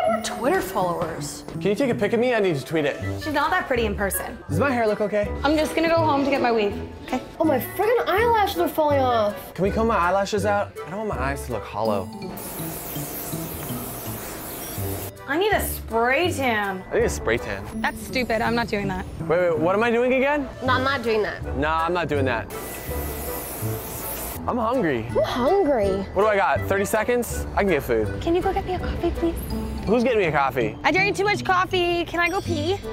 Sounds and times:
Music: 0:00.0 - 0:32.9.

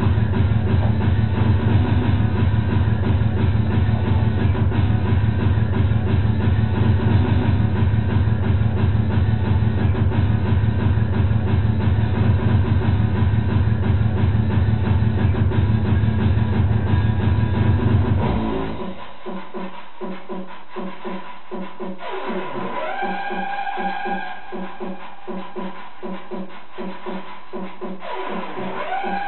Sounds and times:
Electronic music: 0:00.0 - 0:29.2.

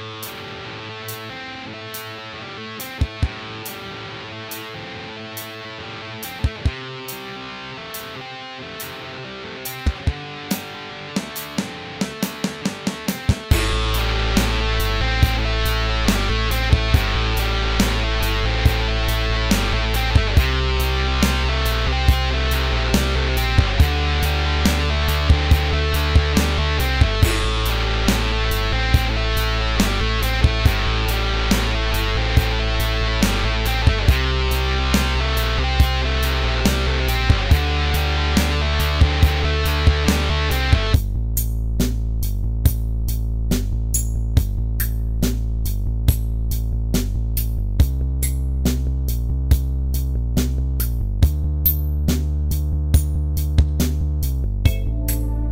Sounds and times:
Strum: 0:00.0 - 0:42.1, 0:54.7 - 0:55.5
Bass guitar: 0:00.0 - 0:55.5.

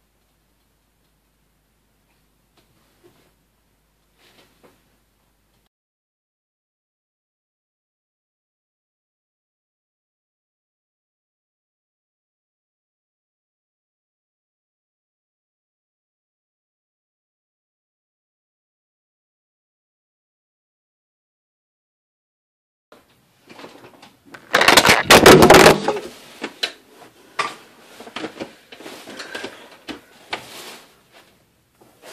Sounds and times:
Inside, small room: 0:00.0 - 0:05.7, 0:23.0 - 0:32.1.

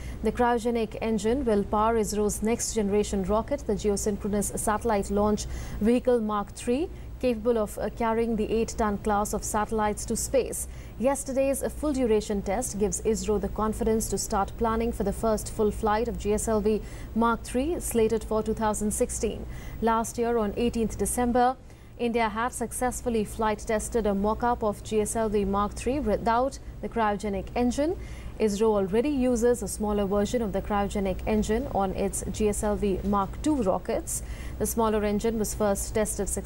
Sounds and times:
Speech: 0:00.3 - 0:36.4.

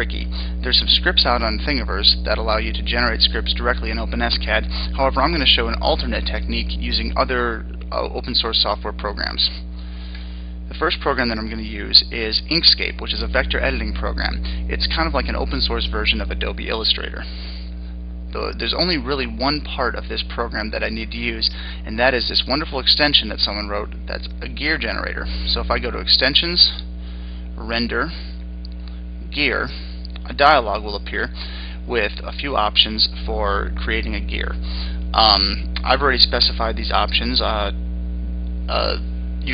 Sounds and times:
Speech: 0:00.0 - 0:09.7, 0:10.7 - 0:17.5, 0:18.3 - 0:26.9, 0:27.6 - 0:28.4, 0:29.3 - 0:37.8, 0:38.7 - 0:39.5.

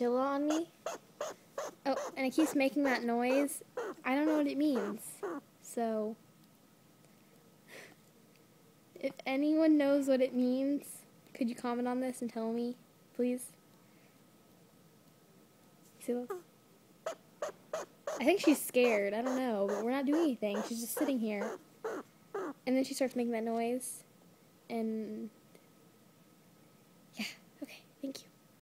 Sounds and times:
Speech: 0:00.0 - 0:00.7, 0:01.9 - 0:06.2, 0:09.0 - 0:13.6, 0:16.0 - 0:16.4, 0:18.2 - 0:21.5, 0:22.7 - 0:24.1, 0:24.7 - 0:25.4, 0:27.2 - 0:28.4.

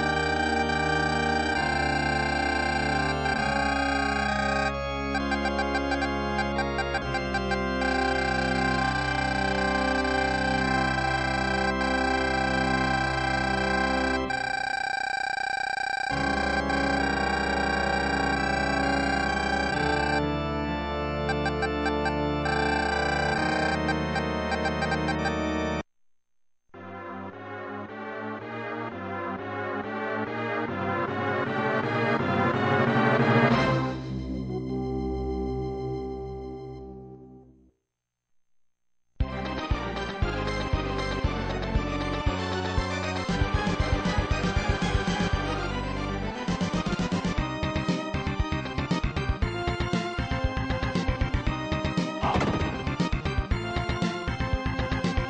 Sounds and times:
Music: 0:00.0 - 0:14.4, 0:16.1 - 0:25.8, 0:26.8 - 0:37.7, 0:39.2 - 0:55.3.

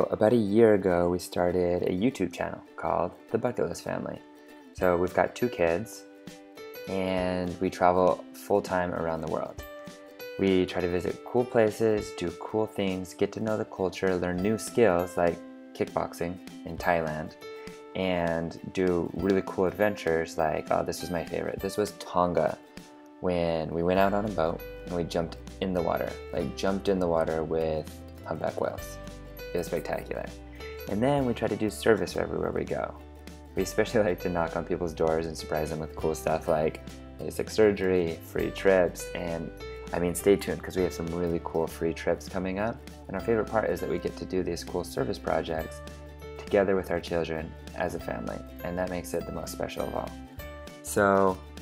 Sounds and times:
Speech: 0:00.0 - 0:04.2, 0:04.8 - 0:06.0, 0:06.9 - 0:09.6, 0:10.4 - 0:17.4, 0:18.0 - 0:22.6, 0:23.2 - 0:33.0, 0:33.6 - 0:45.8, 0:46.4 - 0:50.2, 0:50.8 - 0:51.4
Music: 0:00.0 - 0:51.6.

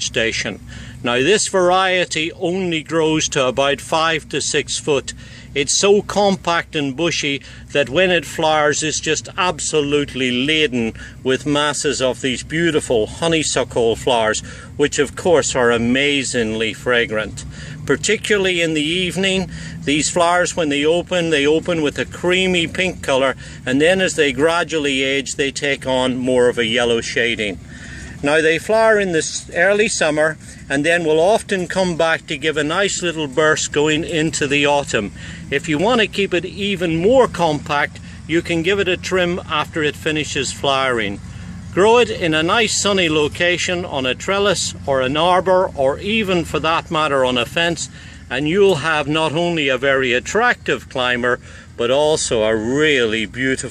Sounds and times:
Speech: 0:00.0 - 0:53.7.

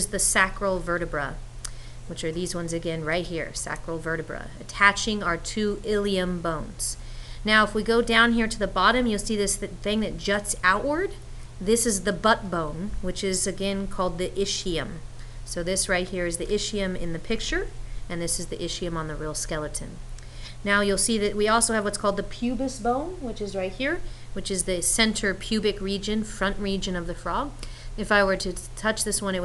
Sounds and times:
Speech: 0:00.0 - 0:01.4, 0:02.1 - 0:20.0, 0:20.6 - 0:29.4.

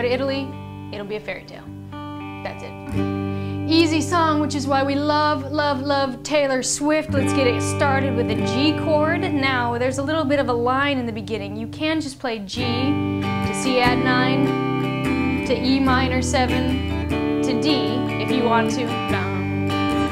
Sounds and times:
Speech: 0:00.0 - 0:01.7, 0:02.4 - 0:02.8, 0:03.7 - 0:14.4, 0:17.5 - 0:19.5
Strum: 0:00.0 - 0:20.1.

